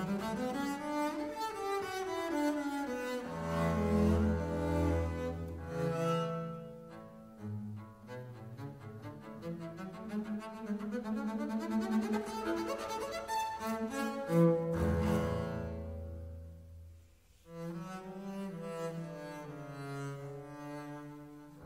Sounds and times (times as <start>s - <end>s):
Violin, fiddle: 0.0s - 16.1s
Cello: 0.0s - 21.6s
Classical music: 0.0s - 21.6s.